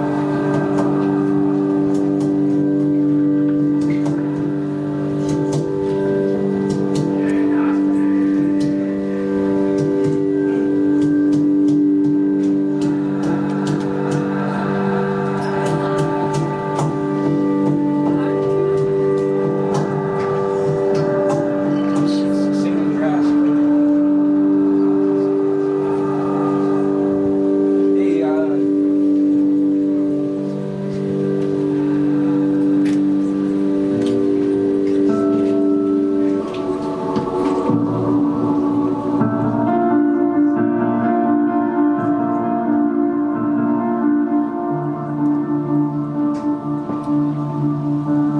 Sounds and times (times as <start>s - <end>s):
Music: 0.0s - 48.3s
Speech: 21.8s - 23.6s, 28.0s - 28.7s.